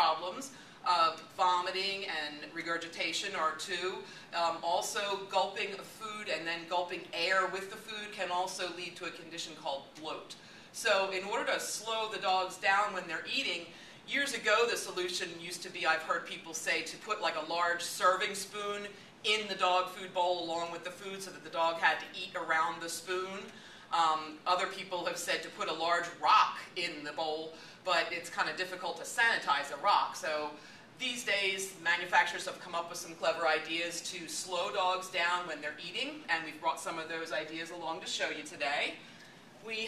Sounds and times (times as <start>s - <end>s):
Speech: 0.0s - 39.0s, 39.6s - 39.8s.